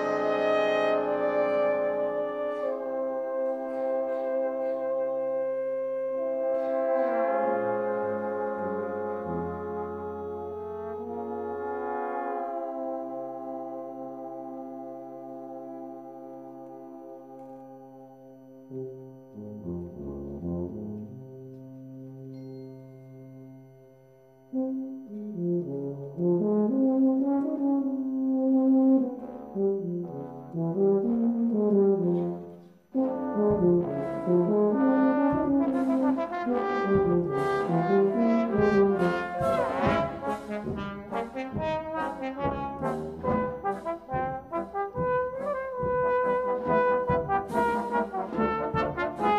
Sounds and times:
Trombone: 0.0s - 22.3s, 24.5s - 49.3s
French horn: 0.0s - 49.3s.

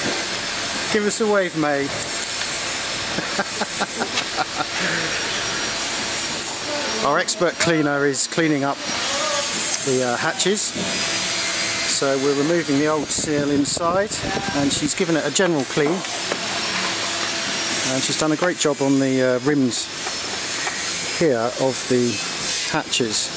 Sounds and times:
Speech: 0.9s - 2.0s, 6.7s - 10.8s, 11.9s - 16.1s, 17.8s - 19.9s, 21.2s - 23.3s.

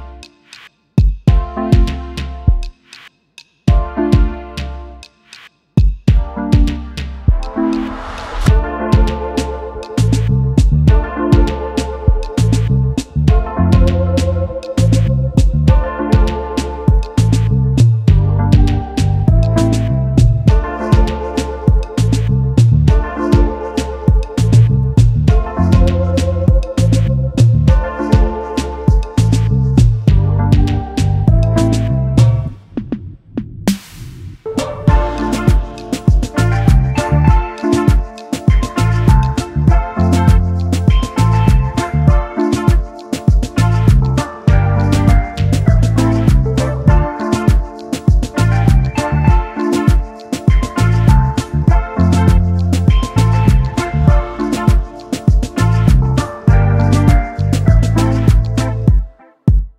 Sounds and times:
Music: 0.0s - 59.7s.

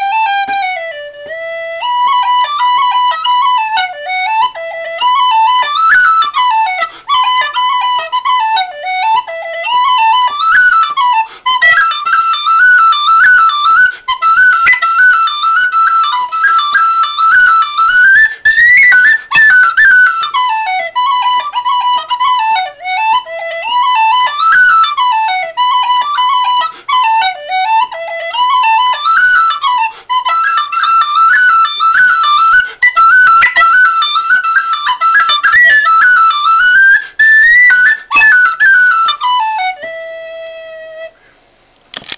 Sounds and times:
Music: 0.0s - 41.2s
Inside, small room: 0.0s - 42.1s.

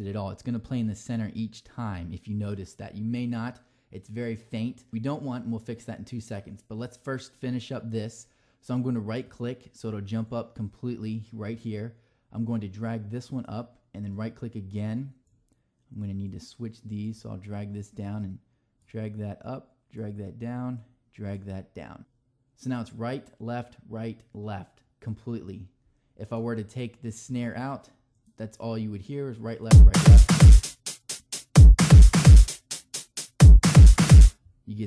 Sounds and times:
Speech: 0.0s - 15.2s, 15.9s - 30.2s, 34.6s - 34.8s
Drum machine: 29.7s - 34.4s.

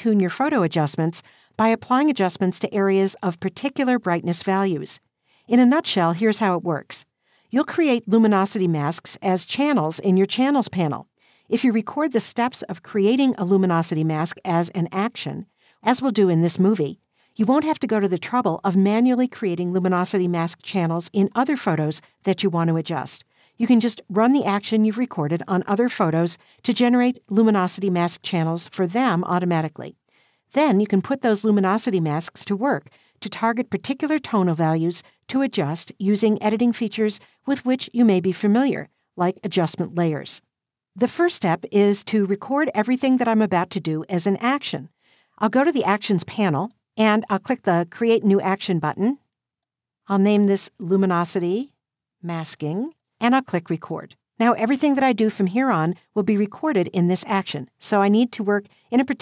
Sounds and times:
Speech: 0.0s - 40.4s, 41.0s - 49.2s, 50.1s - 51.7s, 52.3s - 59.2s.

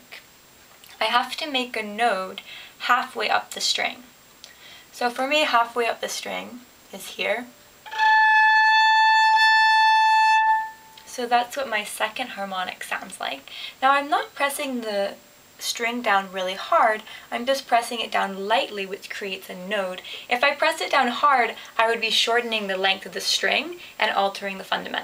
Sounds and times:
Speech: 0.0s - 0.3s, 0.9s - 4.1s, 4.9s - 7.5s, 11.1s - 25.0s
Violin, fiddle: 7.9s - 10.9s.

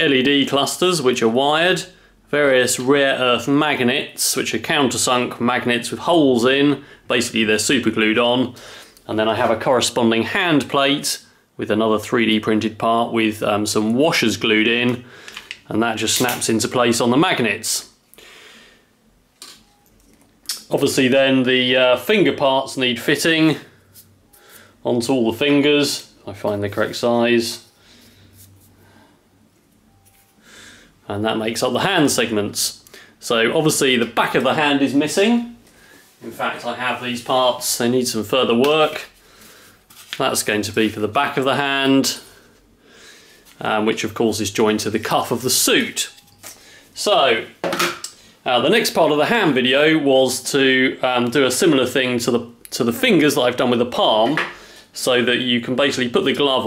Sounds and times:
Speech: 0.0s - 18.0s, 20.5s - 23.7s, 24.8s - 27.7s, 31.1s - 35.6s, 36.2s - 39.2s, 40.2s - 42.3s, 43.6s - 46.2s, 47.0s - 47.6s, 48.4s - 56.6s
Inside, small room: 0.0s - 56.6s.

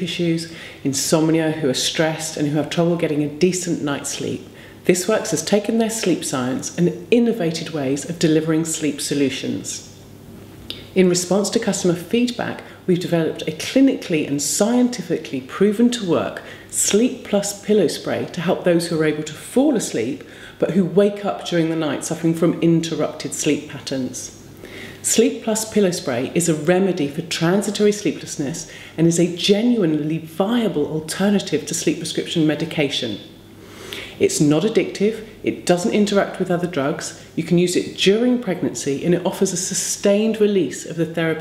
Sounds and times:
Speech: 0.0s - 10.0s, 10.7s - 24.4s, 25.0s - 33.3s, 34.1s - 41.4s.

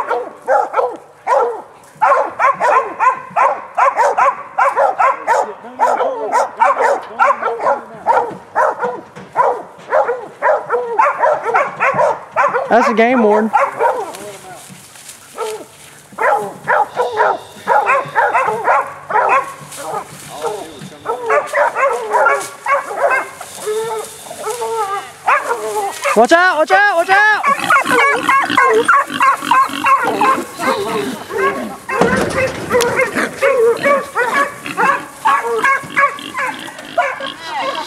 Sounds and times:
Bark: 0.0s - 14.2s, 15.4s - 26.3s, 27.4s - 37.4s
Bow-wow: 0.0s - 14.2s, 15.4s - 26.3s, 27.4s - 37.8s
Pig: 15.4s - 26.2s, 27.3s - 37.8s.

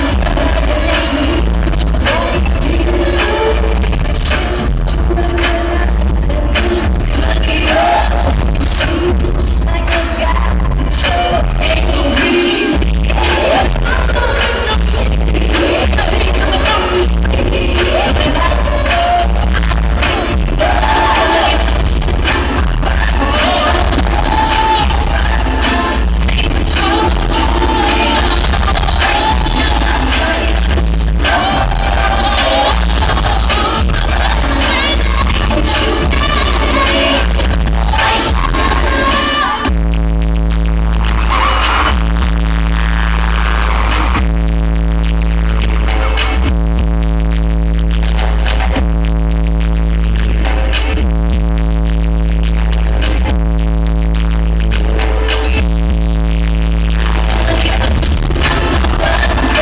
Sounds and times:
Music: 0.0s - 59.6s.

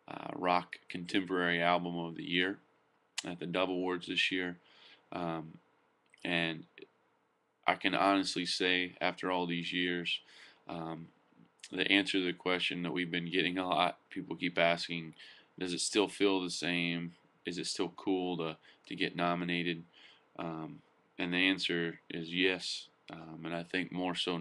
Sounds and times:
Speech: 0.0s - 5.6s, 6.2s - 6.9s, 7.7s - 24.4s.

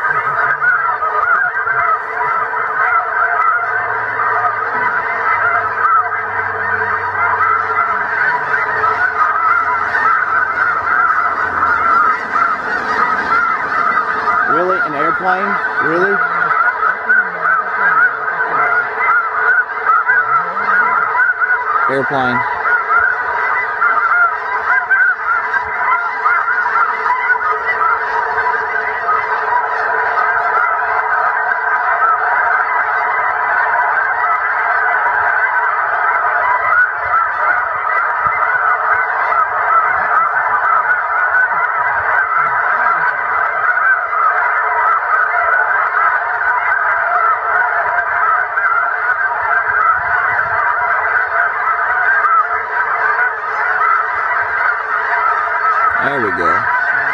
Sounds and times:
Honk: 0.0s - 57.1s.

